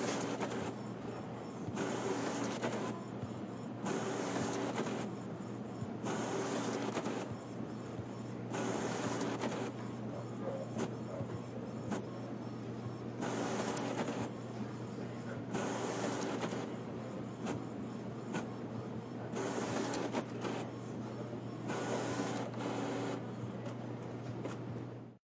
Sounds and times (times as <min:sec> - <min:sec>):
Printer: 0:00.0 - 0:25.2.